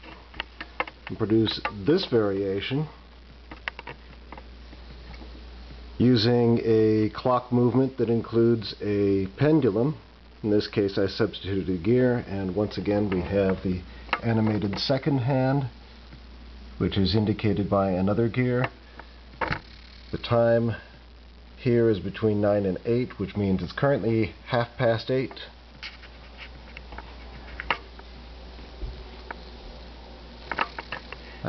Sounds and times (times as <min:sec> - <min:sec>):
Speech: 0:01.1 - 0:03.0, 0:06.0 - 0:15.8, 0:16.8 - 0:18.8, 0:20.1 - 0:20.9, 0:21.6 - 0:25.6.